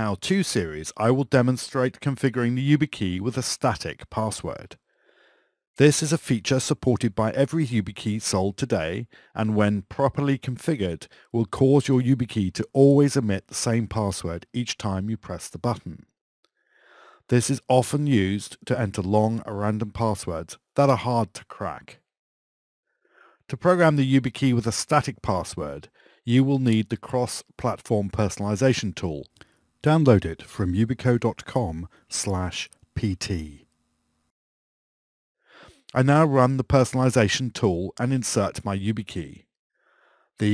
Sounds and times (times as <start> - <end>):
Speech: 0.0 - 4.8, 5.8 - 16.1, 17.3 - 22.1, 23.5 - 33.7, 35.8 - 39.5.